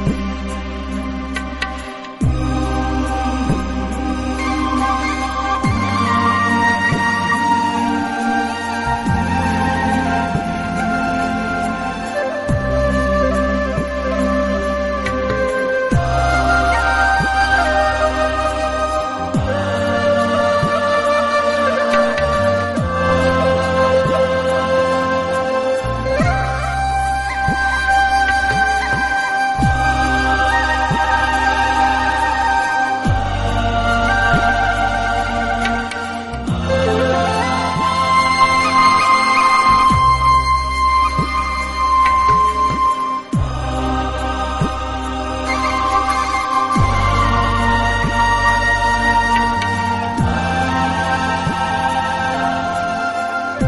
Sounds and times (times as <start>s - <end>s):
Background music: 0.0s - 53.6s
Flute: 0.0s - 53.6s.